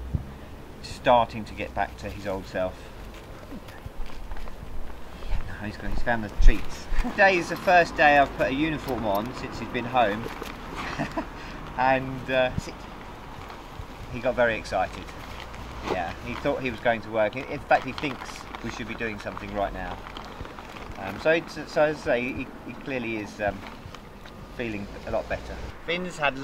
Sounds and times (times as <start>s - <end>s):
Speech: 0.8s - 2.9s, 5.4s - 10.3s, 11.8s - 12.8s, 14.1s - 15.1s, 15.9s - 20.0s, 21.0s - 23.6s, 24.6s - 26.4s.